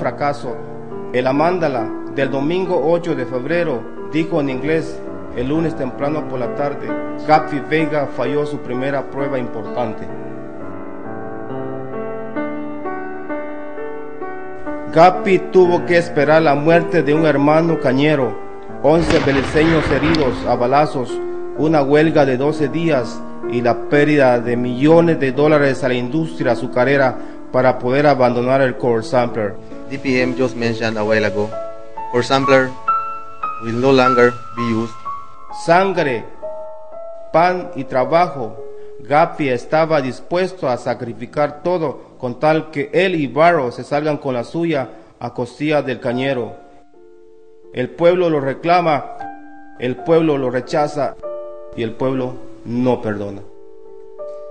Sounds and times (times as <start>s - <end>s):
Speech: 0.0s - 0.6s, 1.2s - 10.2s, 14.9s - 32.8s, 33.6s - 35.0s, 35.6s - 36.3s, 37.4s - 46.6s, 47.8s - 49.1s, 49.8s - 51.2s, 51.8s - 53.5s
Music: 0.0s - 54.5s.